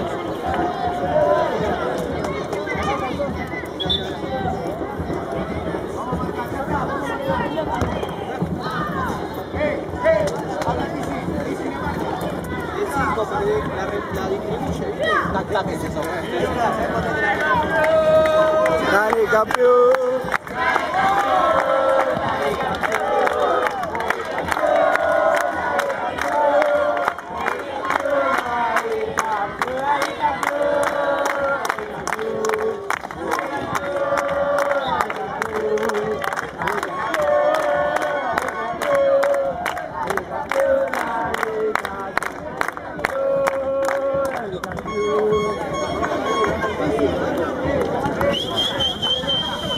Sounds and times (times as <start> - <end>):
Speech: 0.0 - 20.4, 27.3 - 49.7.